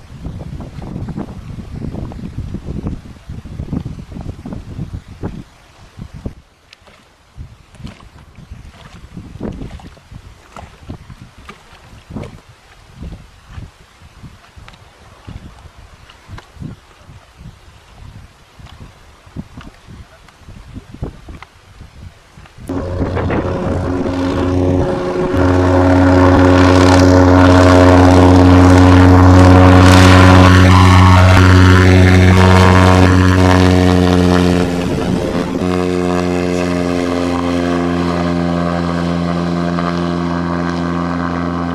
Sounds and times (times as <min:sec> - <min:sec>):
Stream: 0:00.0 - 0:41.7.